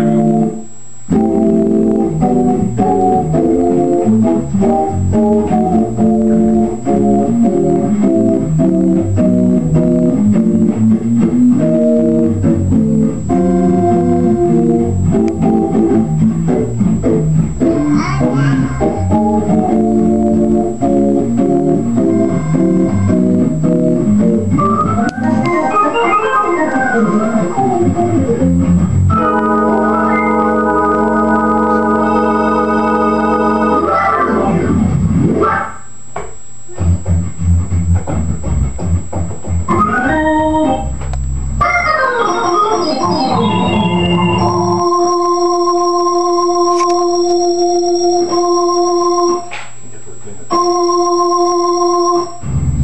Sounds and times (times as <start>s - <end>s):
Hammond organ: 0.0s - 36.1s, 36.7s - 52.8s.